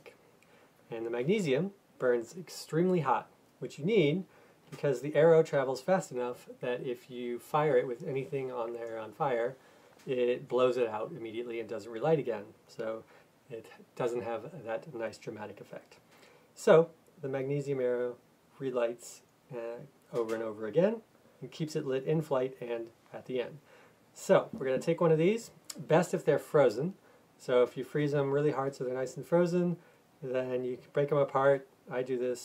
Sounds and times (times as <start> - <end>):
Speech: 0.0 - 0.2, 0.9 - 16.0, 16.6 - 23.6, 24.2 - 32.4.